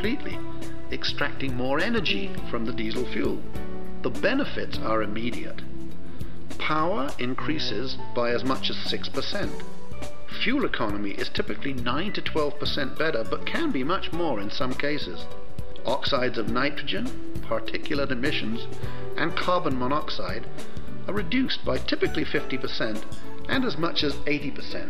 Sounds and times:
Speech: 0.0s - 3.5s, 4.1s - 5.6s, 6.6s - 9.7s, 10.3s - 20.5s, 21.1s - 24.9s
Music: 0.0s - 24.9s.

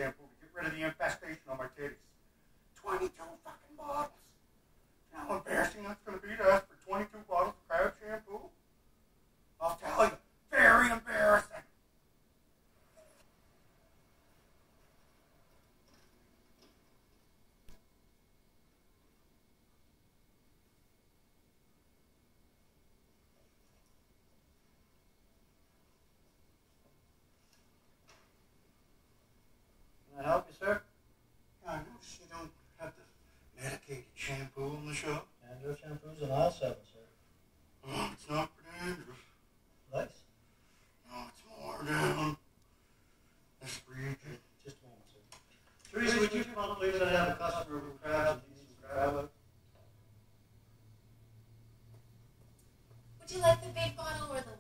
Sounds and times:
Speech: 5.1s - 8.5s, 9.6s - 11.7s, 31.6s - 37.1s, 41.1s - 42.4s, 43.6s - 45.3s, 45.9s - 49.3s, 53.2s - 54.6s.

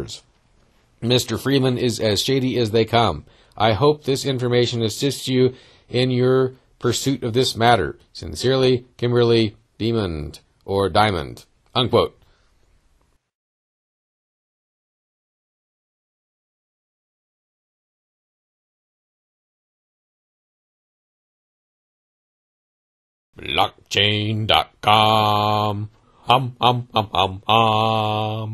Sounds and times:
Speech: 0.0s - 0.3s, 1.0s - 12.2s, 23.4s - 28.5s.

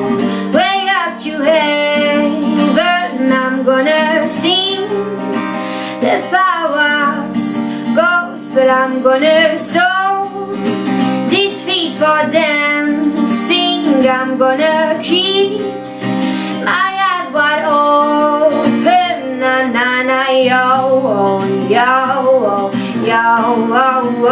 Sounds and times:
Music: 0.0s - 24.3s.

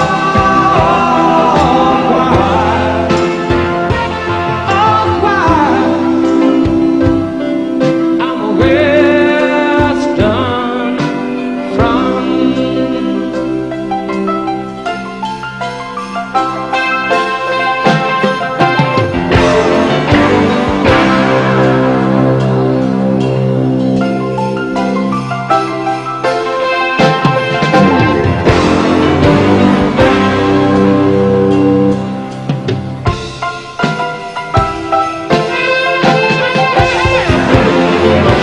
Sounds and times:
Progressive rock: 0.0s - 38.4s.

